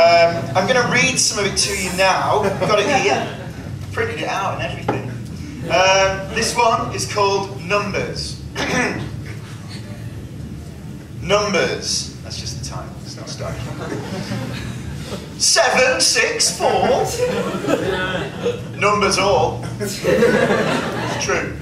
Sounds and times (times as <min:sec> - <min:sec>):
Male speech, man speaking: 0:00.0 - 0:09.1, 0:11.2 - 0:13.8, 0:15.4 - 0:17.4, 0:18.8 - 0:20.1, 0:21.1 - 0:21.6.